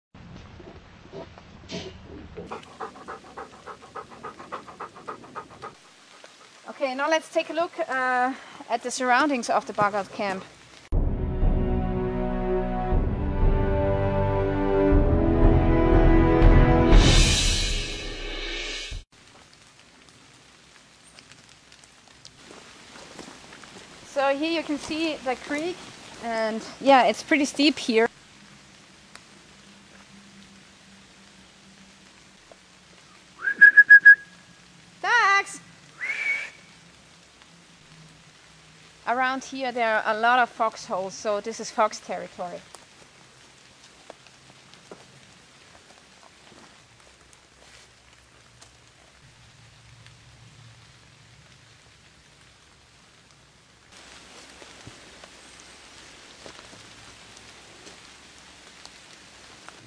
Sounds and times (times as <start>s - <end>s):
Animal: 0.4s - 6.6s
Pant: 2.4s - 6.6s.